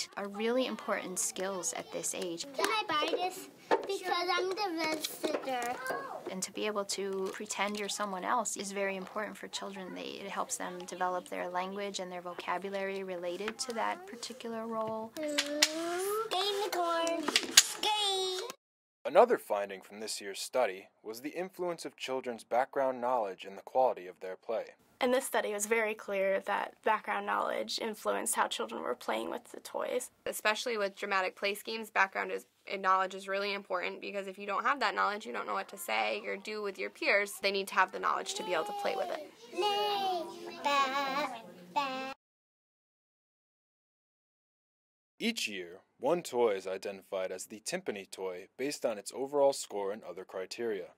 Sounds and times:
Child speech, kid speaking: 0.0 - 6.3, 9.6 - 11.7, 13.4 - 18.6, 38.1 - 42.2.

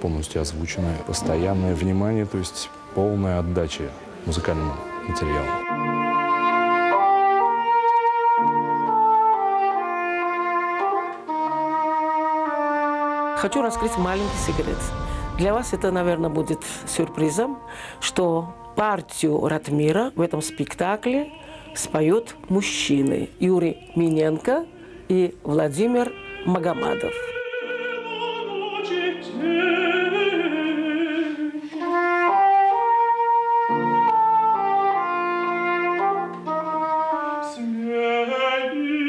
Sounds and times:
Clarinet: 0.7 - 13.8, 25.8 - 39.0.

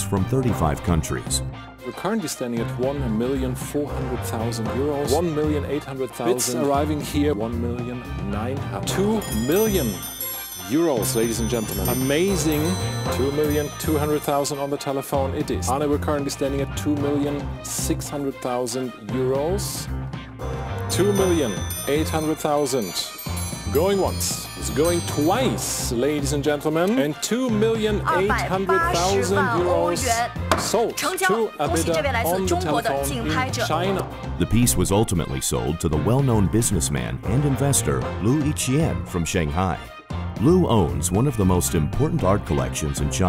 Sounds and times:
Speech: 0.0 - 10.0, 10.7 - 19.9, 20.9 - 23.1, 23.7 - 43.2
Music: 0.0 - 43.2.

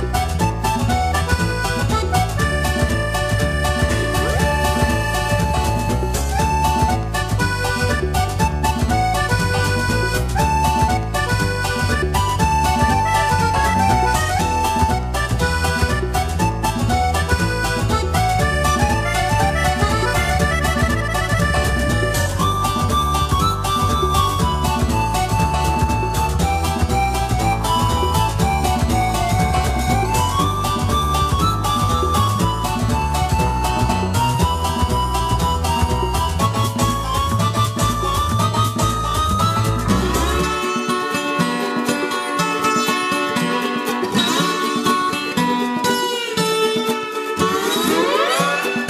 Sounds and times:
Music: 0.0 - 48.8.

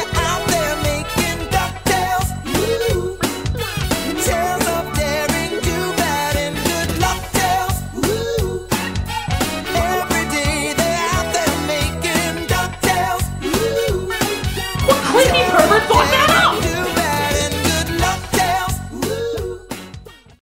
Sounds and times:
Music: 0.0 - 20.4
Speech: 14.9 - 17.0.

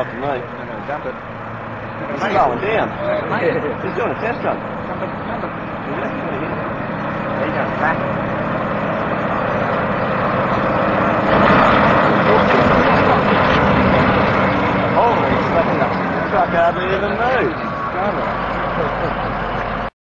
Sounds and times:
Truck: 0.0 - 20.0
Speech: 12.2 - 13.8.

